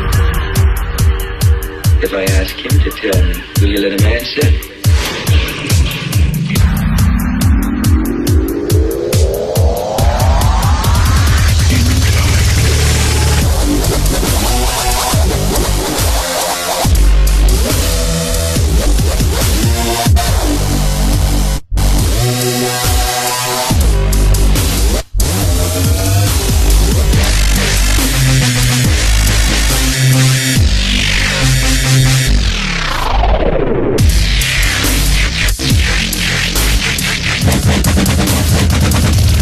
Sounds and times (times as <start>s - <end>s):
Dubstep: 0.0s - 39.4s
Speech: 2.0s - 4.7s, 11.6s - 12.9s.